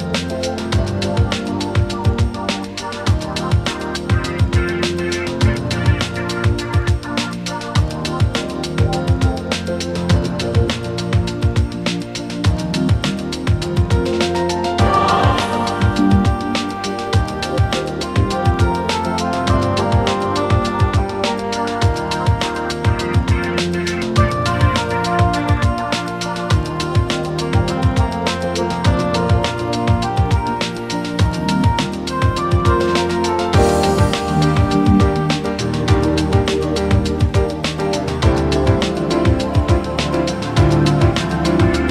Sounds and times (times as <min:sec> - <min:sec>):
Music: 0:00.0 - 0:41.9.